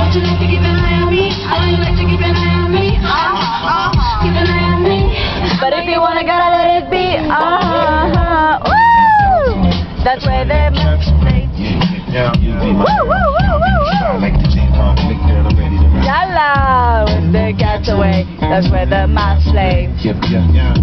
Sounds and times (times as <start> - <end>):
Female singing: 0.0 - 11.5, 16.0 - 20.1
Music: 0.0 - 20.8
Male singing: 7.0 - 20.8.